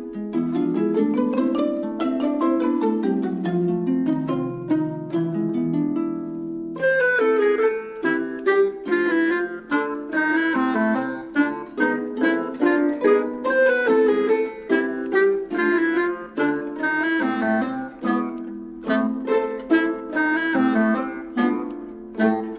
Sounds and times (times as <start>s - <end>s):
Music: 0.0s - 22.5s.